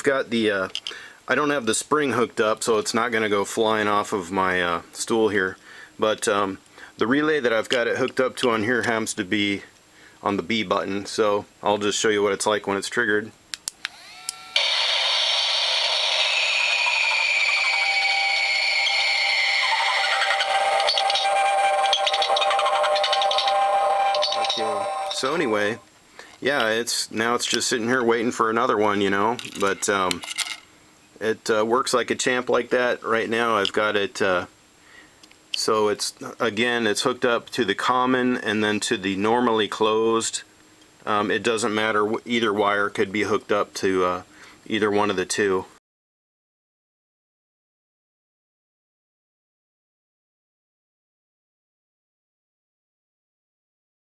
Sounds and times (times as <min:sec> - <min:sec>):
Speech: 0:00.0 - 0:13.4, 0:24.6 - 0:25.8, 0:26.4 - 0:30.2, 0:31.2 - 0:34.5, 0:35.6 - 0:45.8.